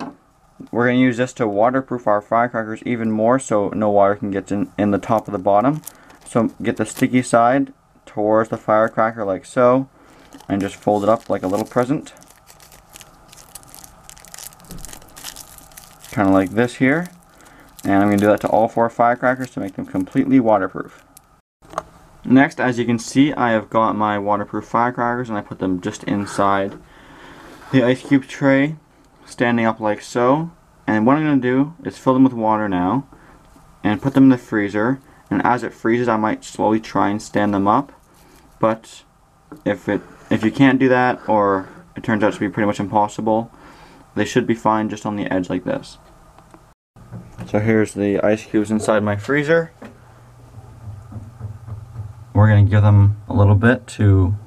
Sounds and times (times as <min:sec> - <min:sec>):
Speech: 0:00.6 - 0:09.9, 0:10.5 - 0:12.2, 0:16.1 - 0:17.2, 0:17.8 - 0:21.0, 0:22.2 - 0:26.8, 0:27.7 - 0:33.1, 0:33.8 - 0:38.0, 0:38.6 - 0:43.5, 0:44.2 - 0:46.1, 0:47.4 - 0:49.8, 0:52.4 - 0:54.4
Crumpling, crinkling: 0:05.0 - 0:07.2, 0:10.1 - 0:21.3.